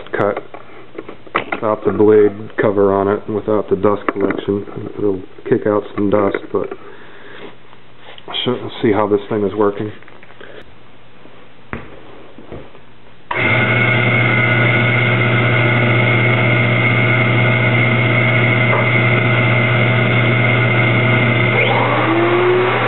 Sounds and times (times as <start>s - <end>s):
Speech: 0.0s - 0.5s, 1.6s - 6.8s, 8.3s - 10.0s.